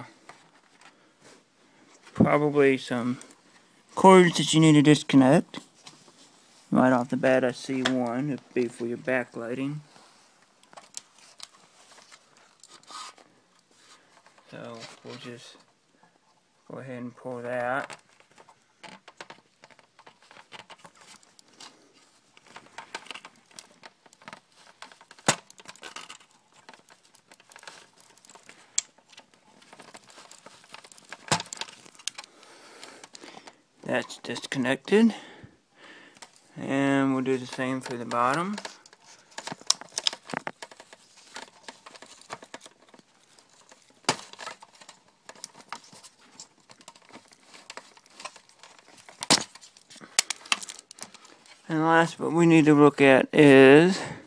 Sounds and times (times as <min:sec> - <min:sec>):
Inside, small room: 0:00.0 - 0:54.2.